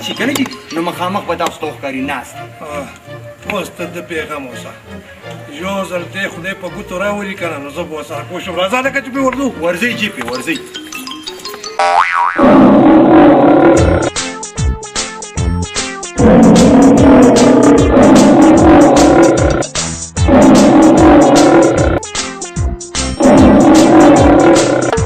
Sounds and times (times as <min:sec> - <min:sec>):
Music: 0:00.0 - 0:12.0, 0:13.1 - 0:25.0
Speech: 0:03.5 - 0:04.8, 0:05.4 - 0:10.7
Outside, rural or natural: 0:11.6 - 0:14.1.